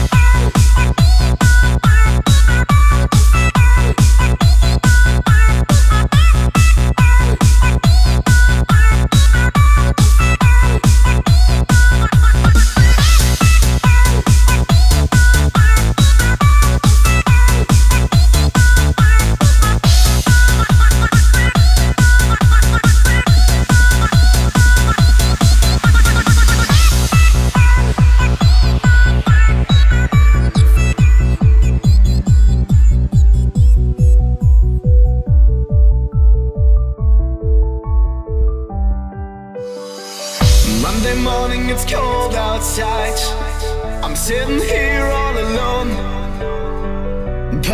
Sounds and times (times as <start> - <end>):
Techno: 0.0 - 38.7, 40.4 - 46.6.